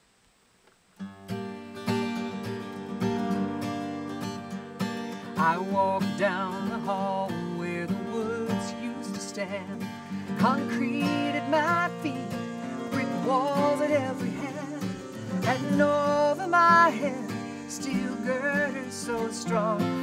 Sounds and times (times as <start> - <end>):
Music: 1.0 - 20.0.